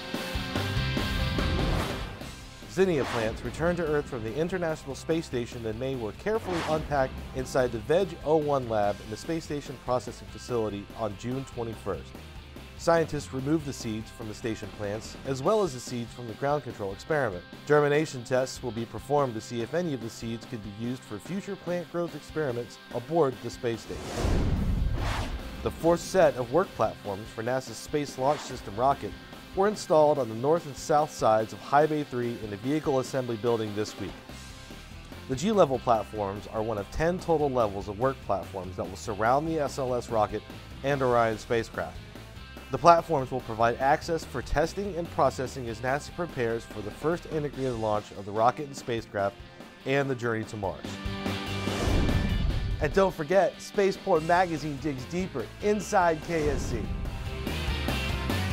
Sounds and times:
Music: 0:00.0 - 0:58.5
Speech: 0:02.7 - 0:12.1, 0:12.8 - 0:24.1, 0:25.7 - 0:34.2, 0:35.3 - 0:42.0, 0:42.7 - 0:51.0, 0:52.8 - 0:56.9.

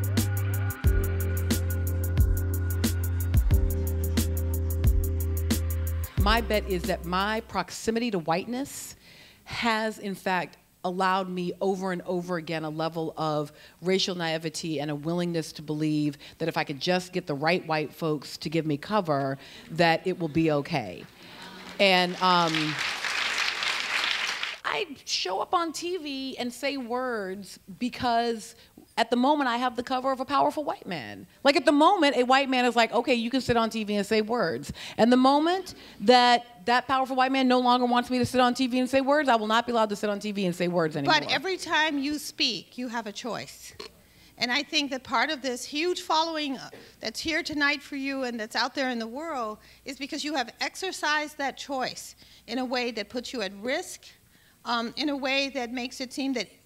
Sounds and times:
Speech: 0:24.7 - 0:43.8.

